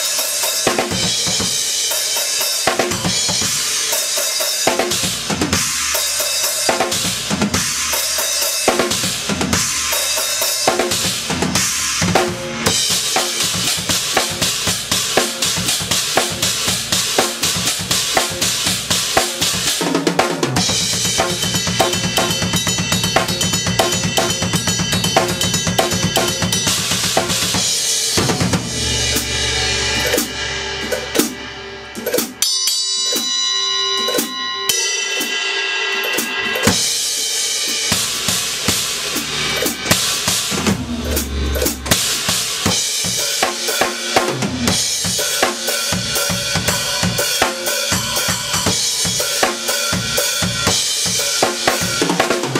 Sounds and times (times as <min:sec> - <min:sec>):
Drum kit: 0:00.0 - 0:52.5
Bass drum: 0:20.6 - 0:32.4, 0:38.0 - 0:43.2.